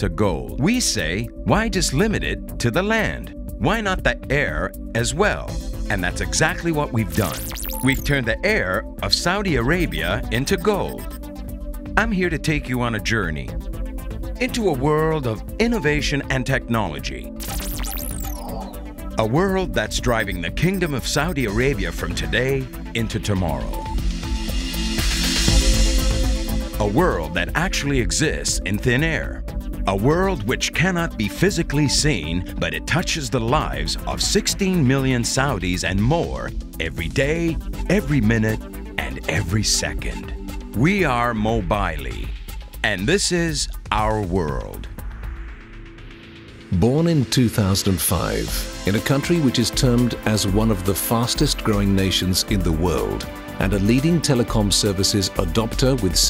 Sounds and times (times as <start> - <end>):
Speech: 0.0 - 11.0, 12.0 - 13.6, 14.4 - 17.3, 19.2 - 23.8, 26.8 - 44.9, 46.7 - 56.3
Music: 0.0 - 56.3.